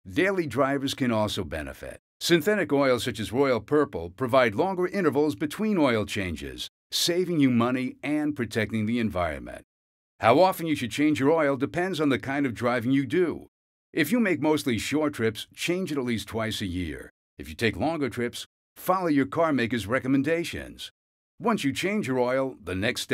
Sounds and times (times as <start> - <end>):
Speech: 0.0 - 23.1.